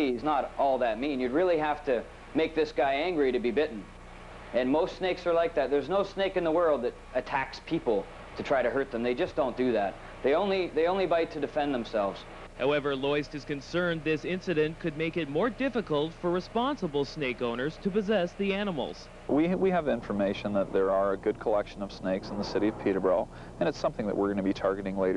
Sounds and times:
Speech: 0.0s - 3.9s, 4.6s - 25.1s.

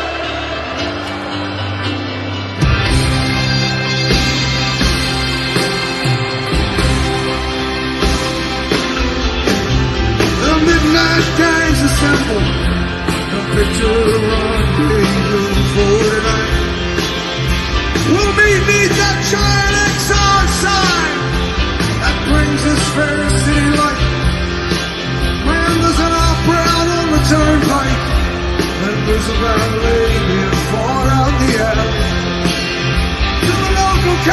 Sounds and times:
Musical instrument: 0.0s - 34.3s.

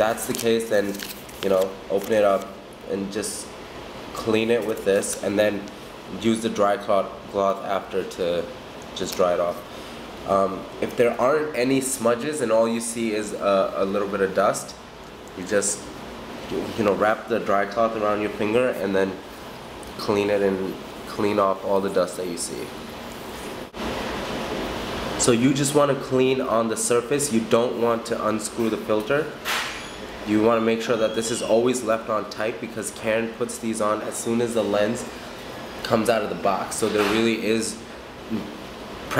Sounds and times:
Speech: 0.0s - 3.5s, 4.2s - 9.6s, 10.2s - 14.8s, 15.4s - 15.9s, 16.5s - 19.2s, 20.0s - 22.8s, 25.2s - 29.4s, 30.3s - 35.1s, 35.8s - 38.5s.

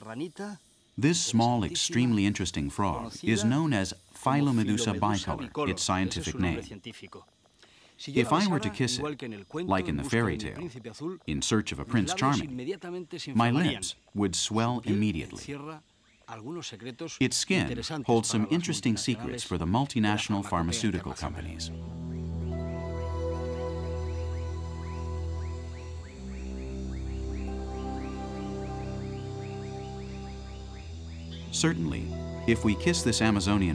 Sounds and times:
Speech: 0.0s - 7.3s, 8.0s - 21.7s, 31.6s - 33.7s.

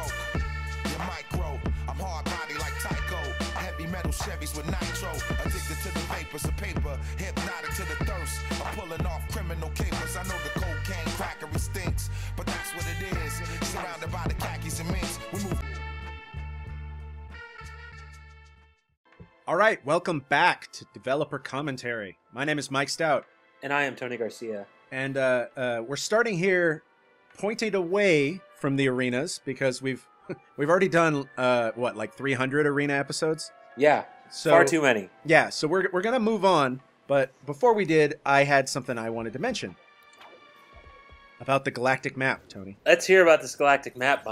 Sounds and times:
Music: 0.0s - 44.3s
Speech: 19.5s - 26.8s, 27.4s - 30.0s, 30.6s - 39.8s, 41.4s - 44.3s.

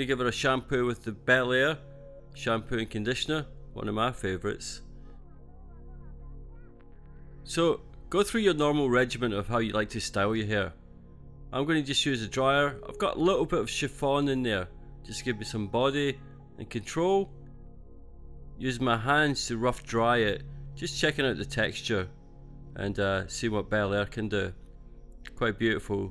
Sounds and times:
Speech: 0.0s - 1.8s, 2.4s - 4.9s, 7.4s - 10.8s, 11.6s - 17.3s, 18.6s - 22.1s, 22.8s - 24.6s, 25.3s - 26.1s.

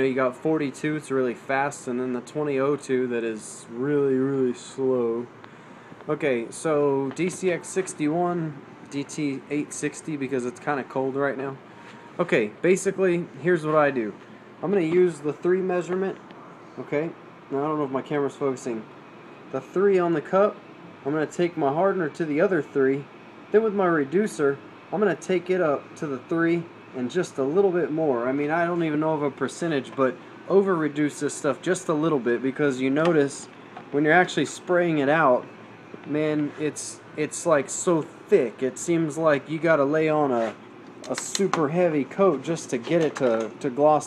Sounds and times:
Speech: 0.0s - 5.3s, 6.1s - 11.6s, 12.2s - 16.2s, 16.8s - 18.9s, 19.5s - 35.5s, 36.1s - 44.0s.

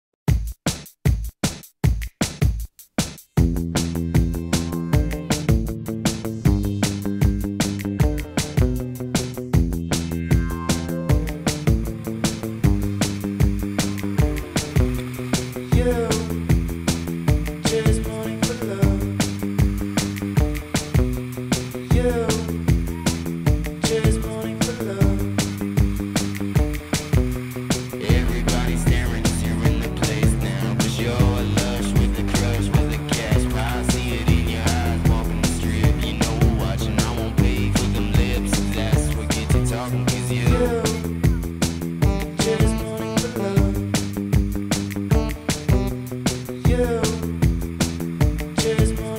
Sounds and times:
Drum machine: 0.2s - 49.1s.

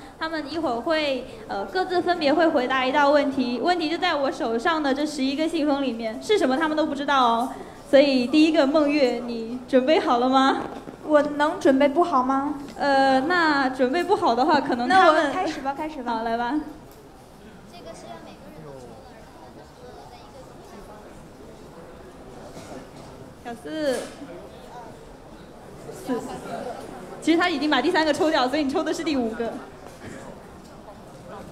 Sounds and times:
Female speech, woman speaking: 0.2s - 16.8s, 23.5s - 24.2s, 26.0s - 29.7s.

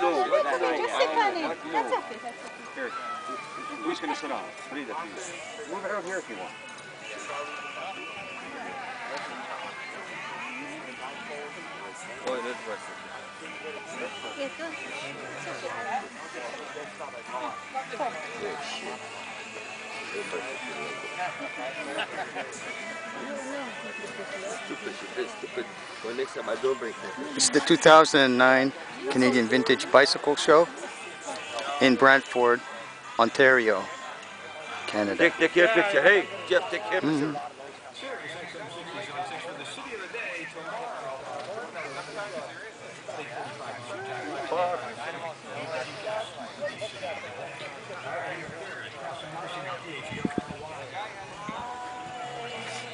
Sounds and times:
Music: 0.0s - 52.9s.

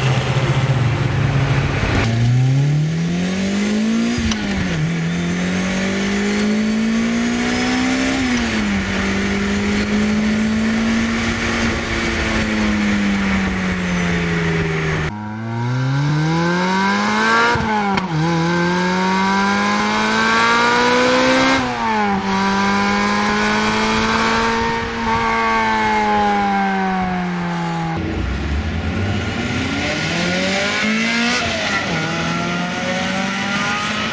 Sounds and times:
Medium engine (mid frequency): 0.0s - 34.1s
Outside, urban or manmade: 0.0s - 34.1s
Race car, auto racing: 0.0s - 34.1s
Accelerating, revving, vroom: 1.9s - 13.3s, 14.2s - 34.1s.

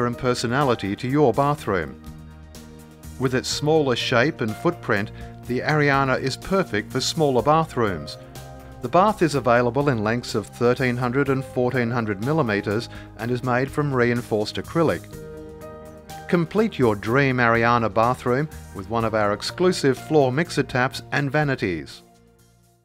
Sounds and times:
Narration, monologue: 0.0s - 22.8s.

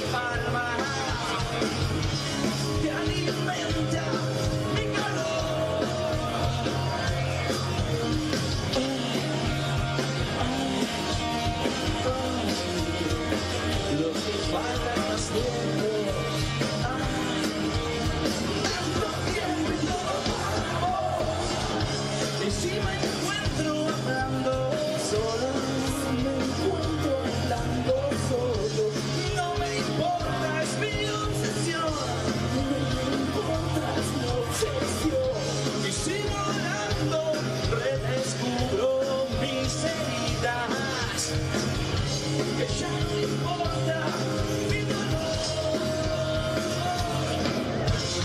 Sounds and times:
Disco: 0.0s - 48.2s
Exciting music: 0.0s - 48.2s.

